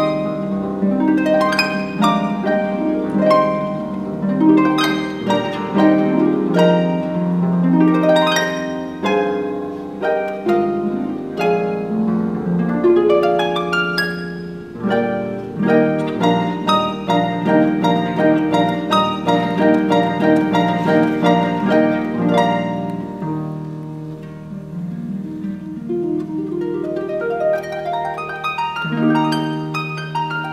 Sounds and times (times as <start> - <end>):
Harp: 0.0 - 30.5
Plucked string instrument: 0.0 - 30.5.